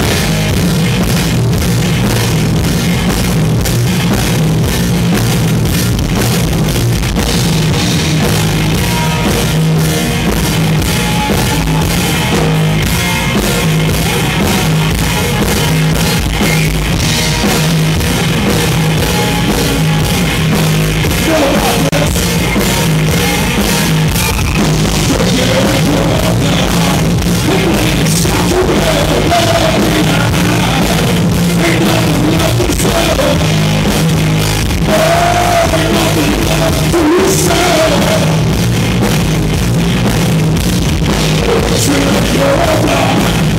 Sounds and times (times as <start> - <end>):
Music: 0.0 - 43.5.